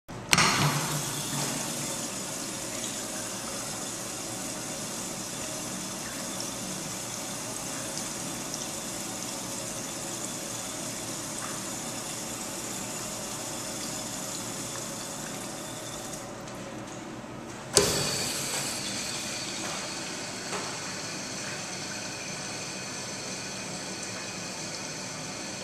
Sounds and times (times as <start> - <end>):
Toilet flush: 0.3 - 16.4, 17.8 - 25.6
Water: 0.3 - 25.6.